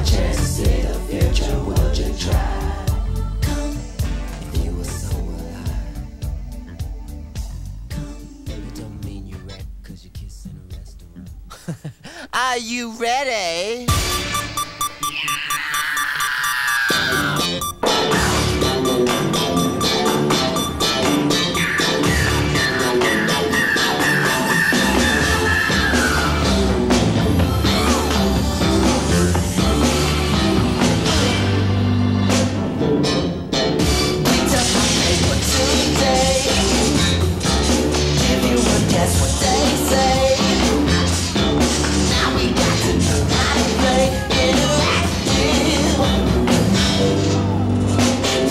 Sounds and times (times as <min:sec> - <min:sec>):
Music: 0:00.0 - 0:11.6, 0:13.9 - 0:15.3, 0:16.9 - 0:48.5.